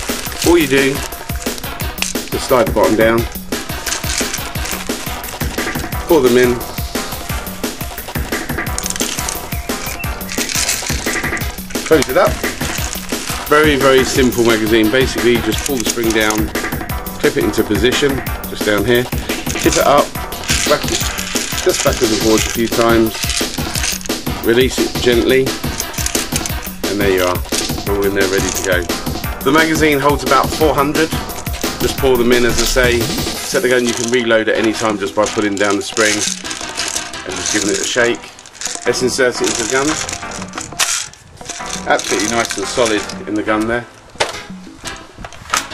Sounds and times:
Music: 0.0 - 45.7
Speech: 0.4 - 1.0, 2.3 - 3.3, 6.1 - 6.7, 11.9 - 12.4, 13.5 - 16.5, 17.2 - 23.2, 24.4 - 25.6, 26.8 - 31.2, 31.8 - 36.3, 37.3 - 40.0, 41.9 - 43.9.

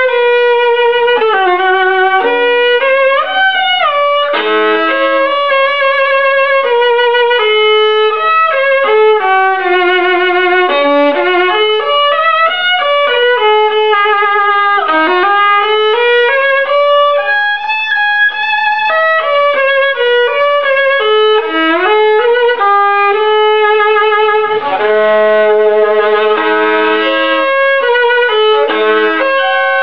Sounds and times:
Violin, fiddle: 0.0 - 29.8.

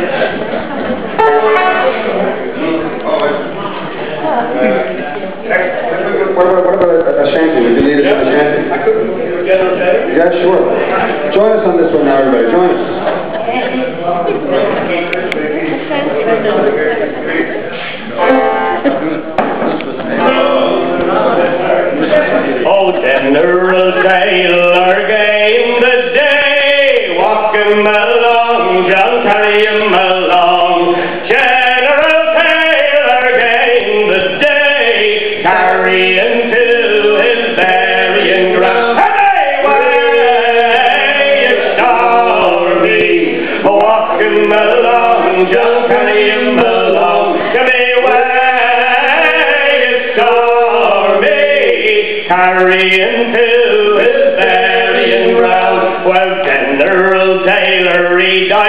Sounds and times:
Speech: 0.0 - 23.5.

